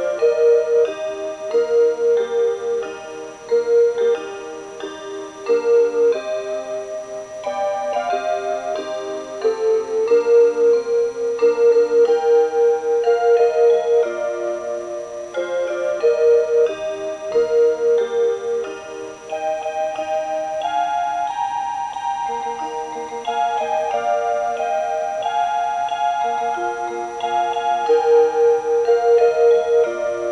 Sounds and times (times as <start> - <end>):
Music: 0.0 - 30.3.